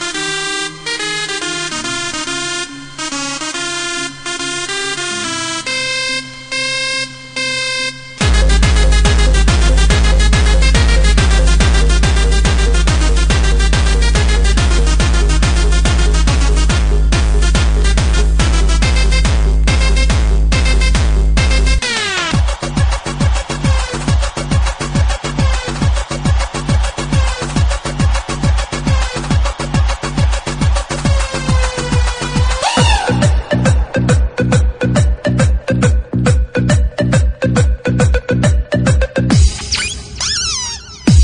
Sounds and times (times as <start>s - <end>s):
Electronica: 0.0s - 41.2s.